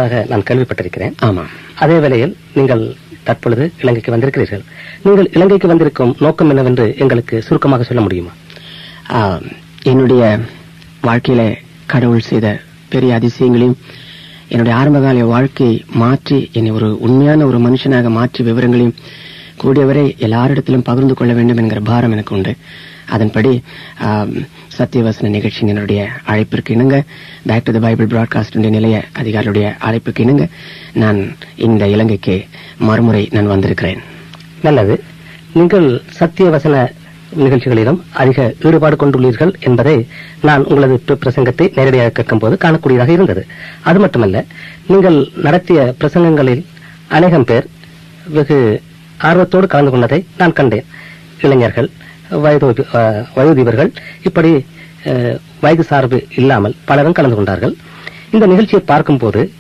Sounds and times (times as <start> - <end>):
Speech: 0.0 - 8.4, 9.0 - 13.8, 14.5 - 59.6.